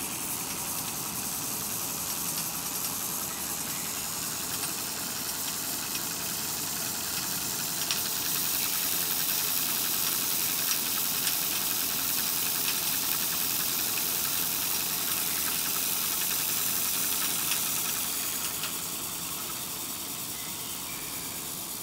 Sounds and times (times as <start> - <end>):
Hiss: 0.0 - 21.8
Rattle: 0.0 - 21.8.